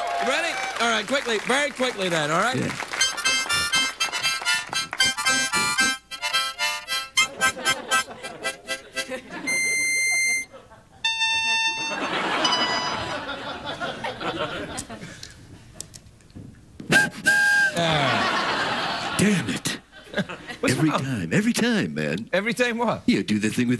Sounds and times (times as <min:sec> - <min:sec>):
Music: 0:03.0 - 0:10.5, 0:11.1 - 0:12.0, 0:17.0 - 0:17.8.